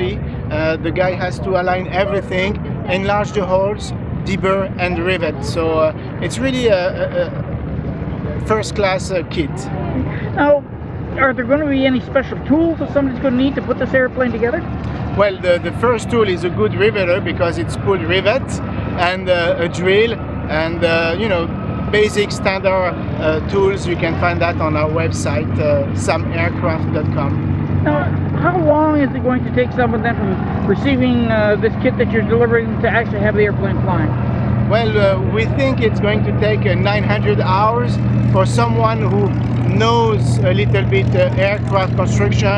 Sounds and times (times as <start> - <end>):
Speech: 0.0 - 7.4, 8.4 - 9.7, 15.2 - 34.1, 34.7 - 42.5
Vehicle: 0.0 - 42.5.